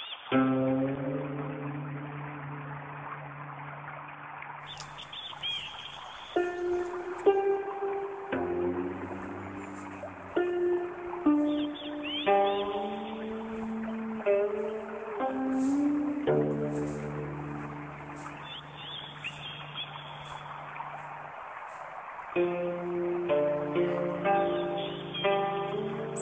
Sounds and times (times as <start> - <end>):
Environmental noise: 0.0 - 26.2.